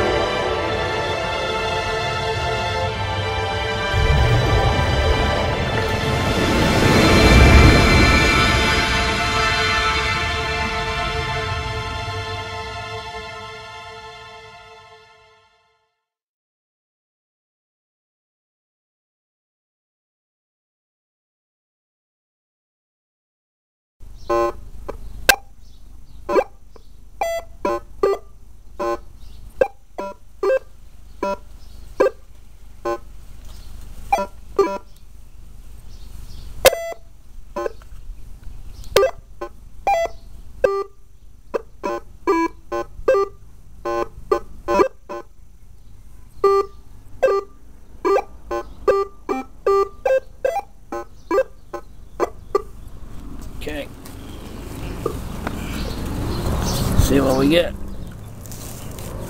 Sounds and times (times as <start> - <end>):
Theme music: 0.0 - 15.8.